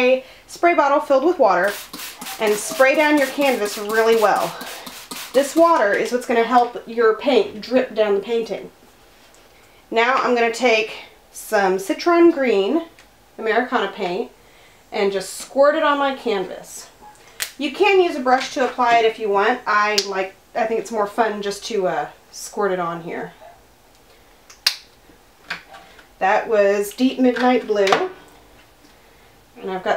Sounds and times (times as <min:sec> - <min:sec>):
Speech: 0:00.0 - 0:01.7, 0:02.4 - 0:04.6, 0:05.3 - 0:08.7, 0:09.9 - 0:14.3, 0:15.0 - 0:17.0, 0:17.6 - 0:23.4, 0:26.2 - 0:28.2, 0:29.6 - 0:29.9.